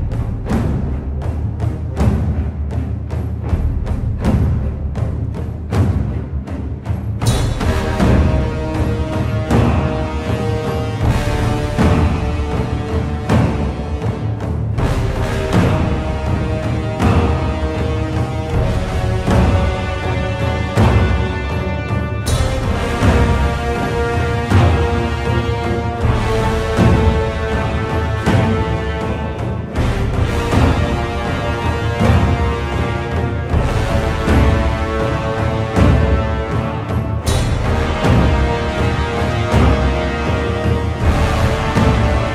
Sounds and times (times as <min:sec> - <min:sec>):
Music: 0:00.0 - 0:42.3.